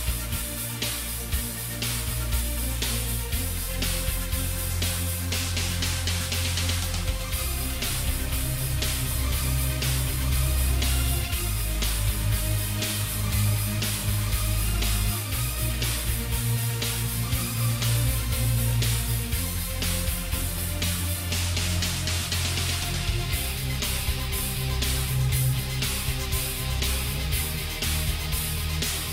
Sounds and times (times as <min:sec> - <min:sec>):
Music: 0:00.0 - 0:29.1.